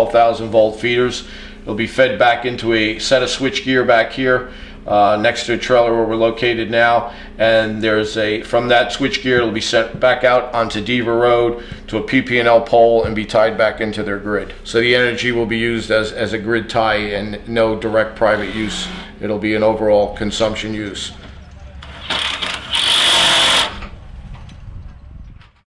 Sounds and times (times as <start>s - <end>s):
Speech: 0.0s - 21.9s
Outside, rural or natural: 21.2s - 25.6s.